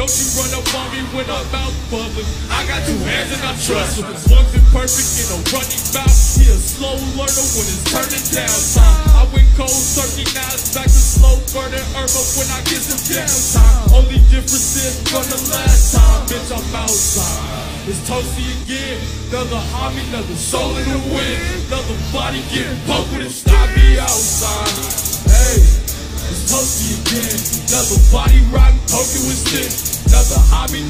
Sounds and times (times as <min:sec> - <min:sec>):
Music: 0:00.0 - 0:30.9.